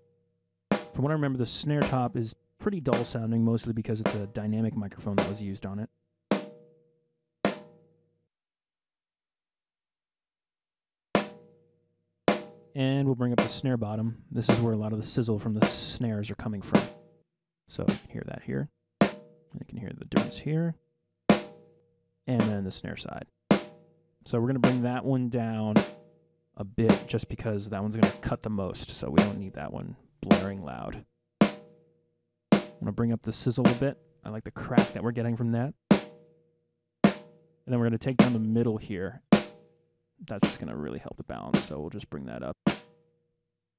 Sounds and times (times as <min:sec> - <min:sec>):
Drum: 0:00.8 - 0:02.2, 0:02.9 - 0:03.3, 0:04.0 - 0:04.4, 0:05.1 - 0:05.4, 0:06.4 - 0:06.6, 0:11.2 - 0:11.5, 0:12.3 - 0:12.7, 0:13.4 - 0:13.7, 0:14.4 - 0:14.9, 0:15.6 - 0:16.0, 0:16.7 - 0:17.0, 0:17.7 - 0:18.2, 0:19.0 - 0:19.4, 0:20.1 - 0:20.6, 0:21.3 - 0:21.6, 0:22.3 - 0:22.8, 0:23.5 - 0:23.8, 0:24.5 - 0:25.0, 0:25.7 - 0:26.0, 0:26.8 - 0:28.4, 0:29.0 - 0:29.5, 0:30.2 - 0:31.7, 0:32.6 - 0:34.0, 0:34.6 - 0:35.1, 0:35.9 - 0:36.2, 0:37.1 - 0:37.4, 0:38.1 - 0:38.7, 0:39.3 - 0:39.6, 0:40.3 - 0:40.8, 0:41.5 - 0:41.8, 0:42.6 - 0:42.9.